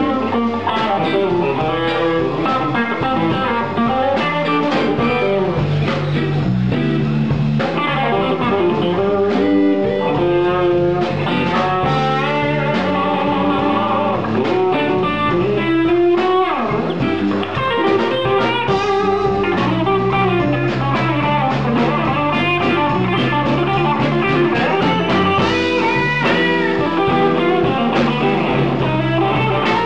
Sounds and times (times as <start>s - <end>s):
Electric guitar: 0.0s - 29.8s.